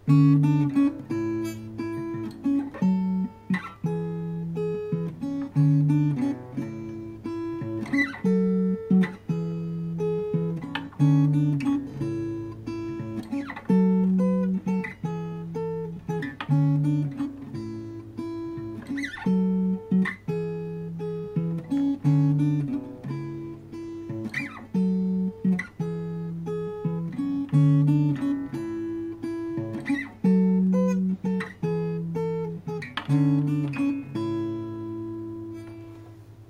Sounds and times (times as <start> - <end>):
Music: 0.0 - 36.5.